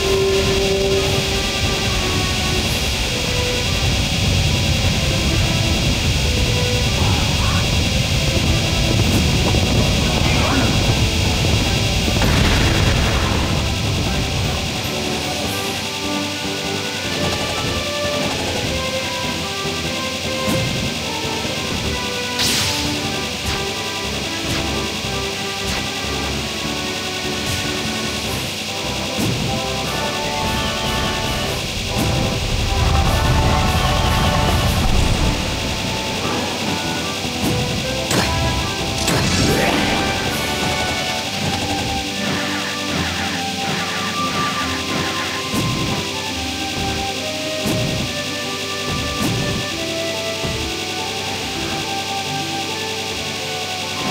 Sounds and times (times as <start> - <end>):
Music: 0.0 - 54.1.